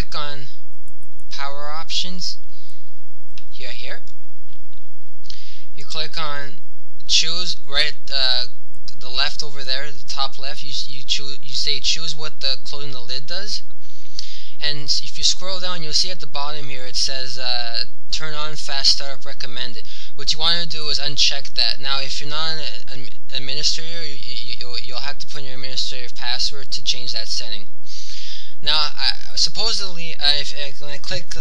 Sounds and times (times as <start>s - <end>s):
Speech: 0.0s - 0.6s, 1.3s - 2.4s, 3.4s - 4.1s, 5.3s - 31.4s.